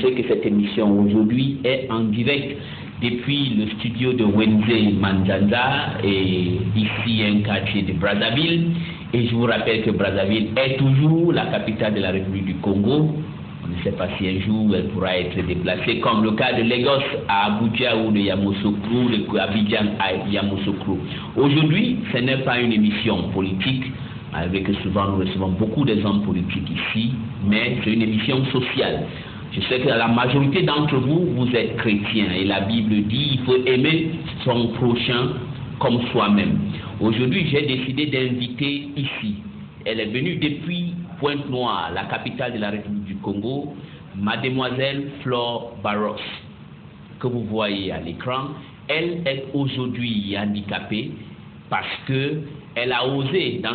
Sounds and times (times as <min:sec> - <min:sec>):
Speech: 0:00.0 - 0:46.5, 0:47.2 - 0:53.7.